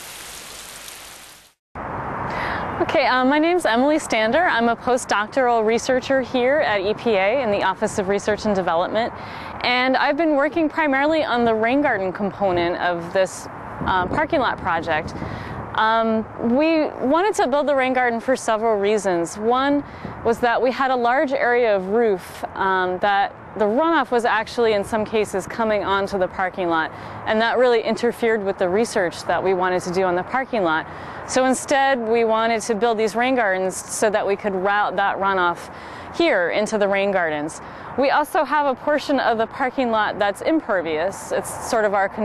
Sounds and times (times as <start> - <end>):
Speech: 2.8 - 15.1, 15.8 - 42.2.